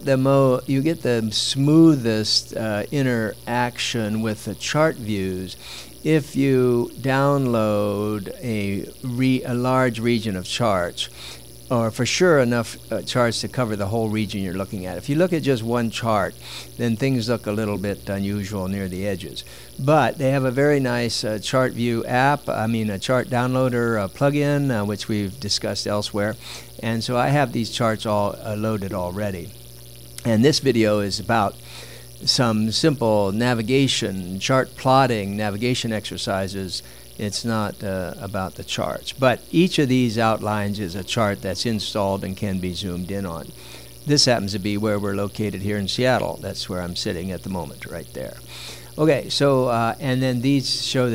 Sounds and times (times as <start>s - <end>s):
Speech: 0.0s - 11.1s, 11.7s - 29.6s, 30.2s - 31.6s, 32.2s - 48.4s, 49.0s - 51.1s.